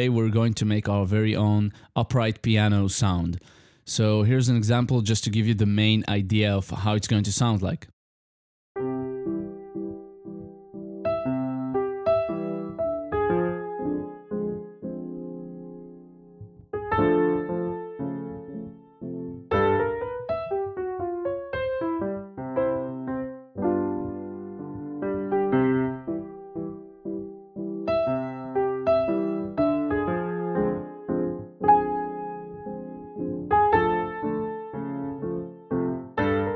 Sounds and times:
Music: 8.8s - 36.5s.

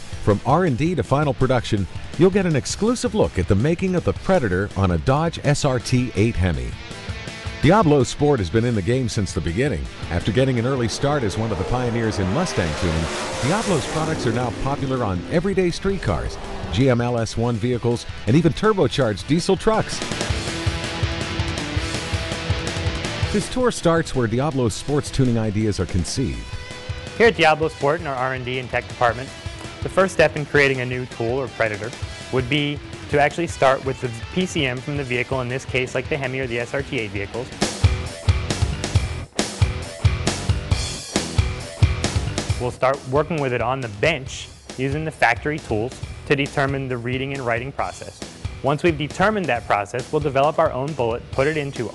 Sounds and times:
Music: 0.0s - 51.9s
Speech: 0.2s - 6.8s, 7.6s - 20.1s, 23.3s - 26.5s, 27.2s - 37.6s, 42.6s - 51.9s.

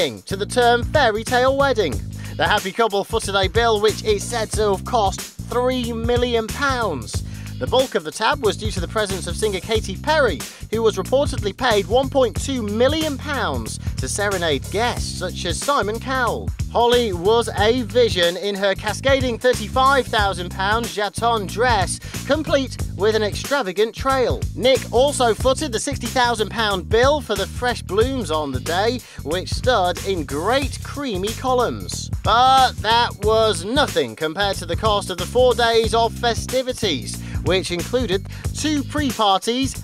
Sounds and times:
Music: 0.0s - 39.8s
Speech: 0.0s - 39.8s.

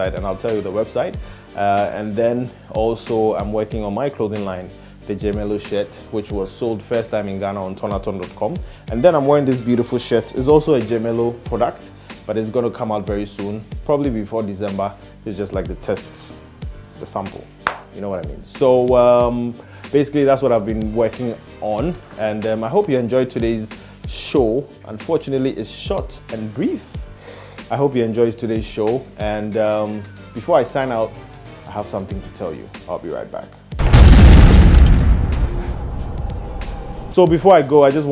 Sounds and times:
Speech: 0.0s - 16.4s, 17.0s - 27.0s, 27.7s - 31.1s, 31.7s - 33.6s, 37.2s - 38.1s
Music: 0.0s - 38.1s.

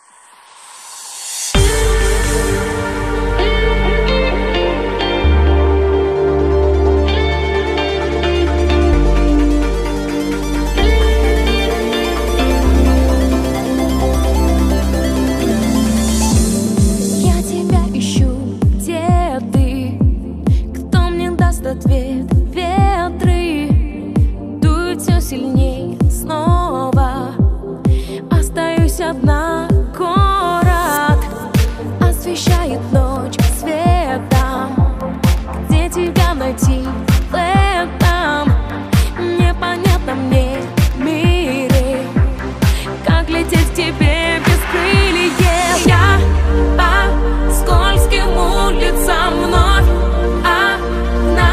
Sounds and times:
Soul music: 1.6s - 51.5s.

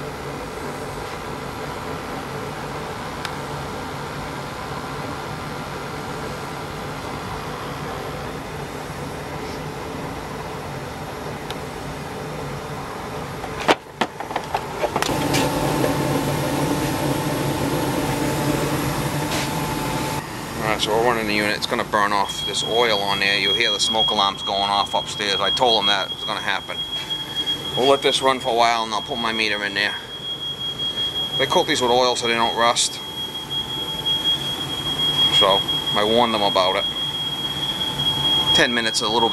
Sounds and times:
Speech: 20.6s - 26.8s, 27.8s - 30.0s, 31.4s - 33.0s, 35.3s - 36.8s, 38.6s - 39.3s.

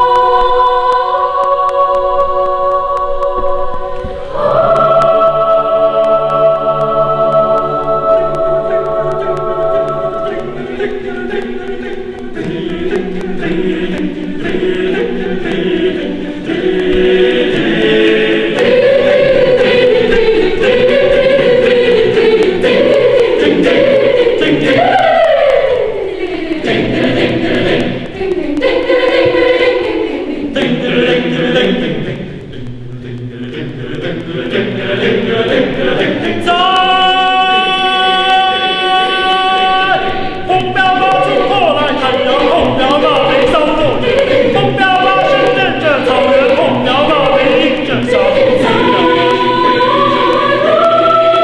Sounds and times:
Choir: 0.0s - 51.4s.

